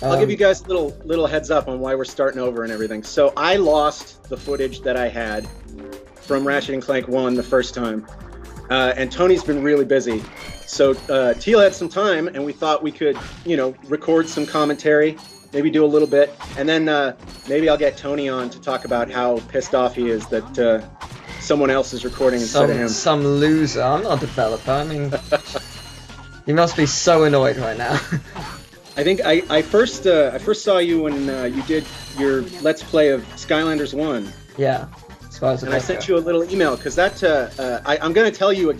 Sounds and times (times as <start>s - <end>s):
Speech: 0.0s - 5.5s, 6.3s - 8.0s, 8.7s - 20.8s, 21.4s - 25.6s, 26.5s - 28.0s, 29.0s - 38.7s
Music: 0.0s - 38.7s.